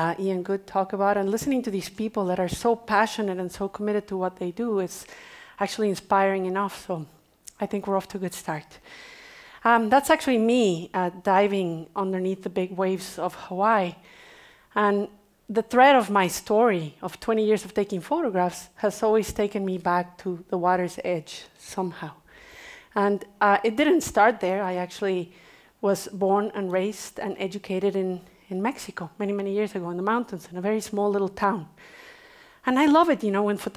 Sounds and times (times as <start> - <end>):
Speech: 0.0 - 5.0, 5.6 - 8.8, 9.6 - 14.0, 14.8 - 22.2, 23.0 - 31.7, 32.6 - 33.7.